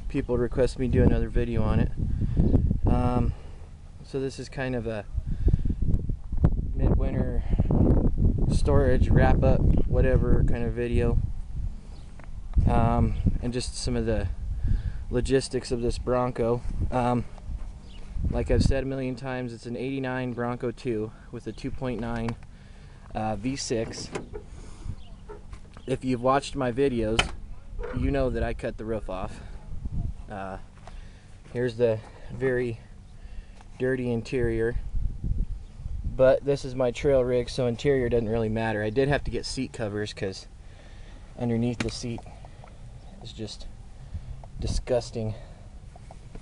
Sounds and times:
Speech: 0.0 - 2.0, 2.9 - 3.4, 4.0 - 5.1, 6.8 - 7.6, 8.5 - 11.2, 12.6 - 14.4, 15.1 - 17.3, 18.3 - 22.4, 23.1 - 24.2, 25.8 - 29.6, 30.3 - 30.7, 31.5 - 32.9, 33.8 - 34.8, 36.1 - 40.5, 41.4 - 42.3, 43.2 - 43.7, 44.6 - 45.5.

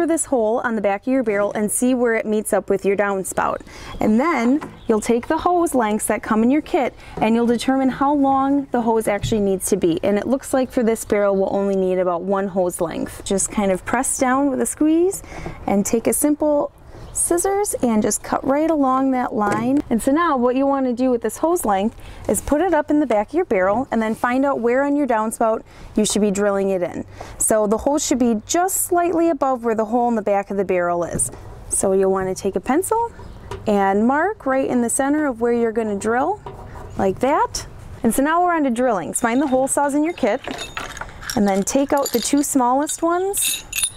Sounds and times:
Speech: 0.0 - 36.4, 37.0 - 40.6, 41.4 - 43.6.

